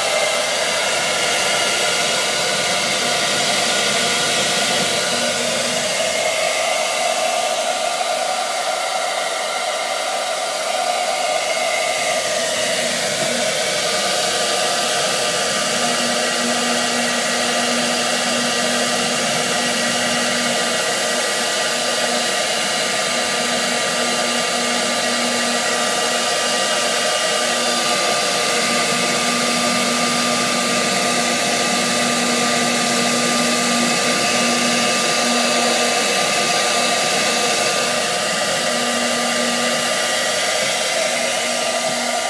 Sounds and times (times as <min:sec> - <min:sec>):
Inside, small room: 0:00.0 - 0:42.3.